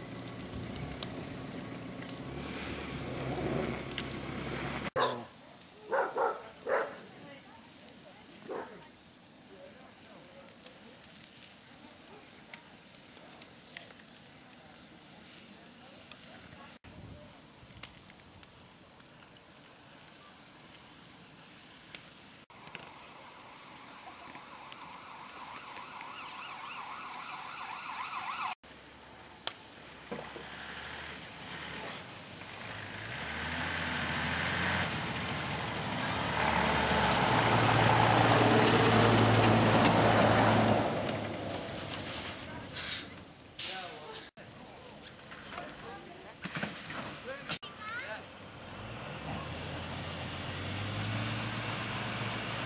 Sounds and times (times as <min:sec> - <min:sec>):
Vehicle: 0:00.0 - 0:52.6.